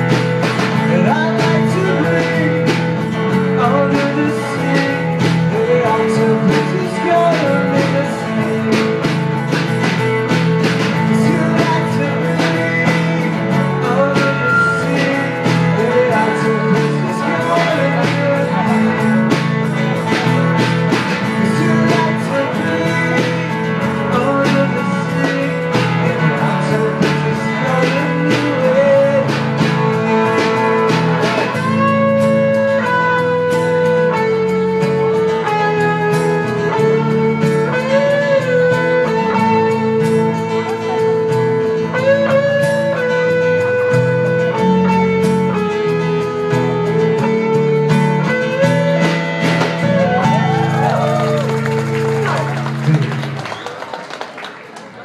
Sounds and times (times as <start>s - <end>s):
Guitar: 0.0s - 55.0s
Singing: 10.9s - 33.1s.